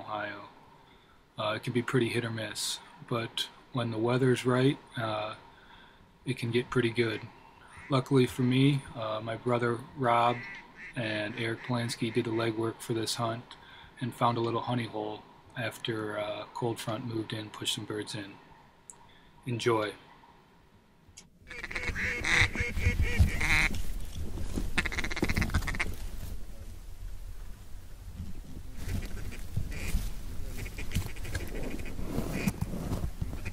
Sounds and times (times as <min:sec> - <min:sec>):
Quack: 0:10.3 - 0:11.8, 0:21.5 - 0:23.8, 0:24.8 - 0:26.0, 0:28.8 - 0:30.0, 0:30.6 - 0:32.6.